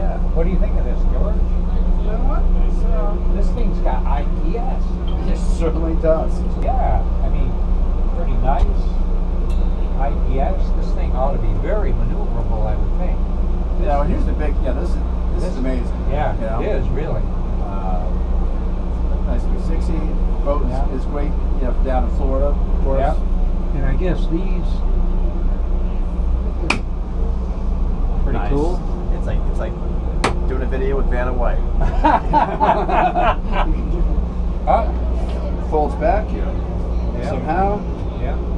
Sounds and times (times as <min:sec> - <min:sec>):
Speech: 0:00.0 - 0:07.6, 0:08.2 - 0:09.0, 0:10.0 - 0:13.2, 0:13.8 - 0:18.2, 0:19.1 - 0:24.8, 0:28.3 - 0:29.8, 0:30.5 - 0:31.7, 0:33.6 - 0:38.5
Vehicle: 0:00.0 - 0:38.5.